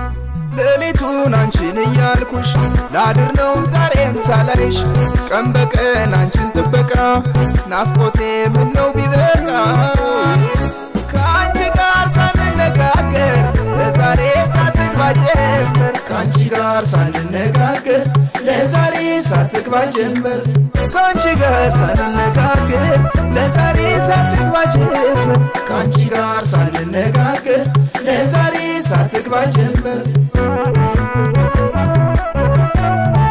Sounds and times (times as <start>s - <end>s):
Folk music: 0.0s - 16.8s, 20.8s - 26.4s, 30.4s - 33.3s
Rhythm and blues: 0.0s - 33.3s.